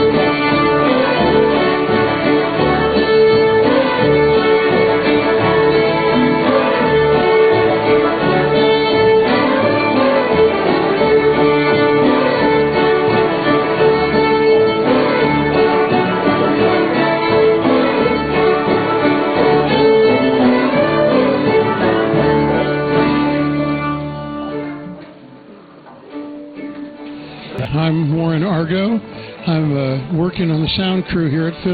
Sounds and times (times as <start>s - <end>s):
Violin, fiddle: 0.0s - 25.2s.